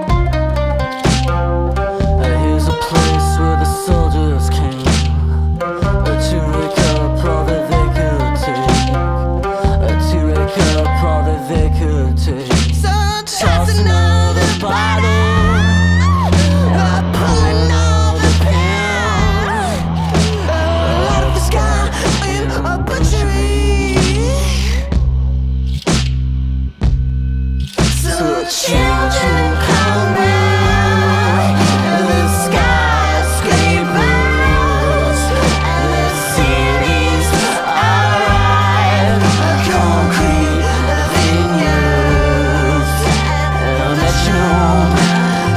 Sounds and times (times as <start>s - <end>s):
Music: 0.0s - 45.5s.